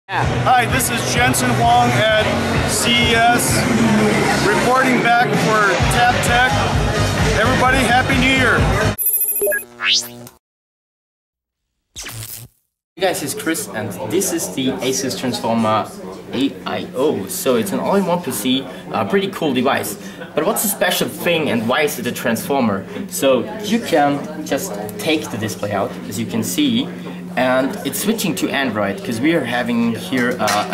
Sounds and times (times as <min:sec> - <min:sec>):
Speech: 0:00.1 - 0:06.7, 0:07.3 - 0:08.8, 0:13.0 - 0:30.7
Music: 0:00.1 - 0:09.0.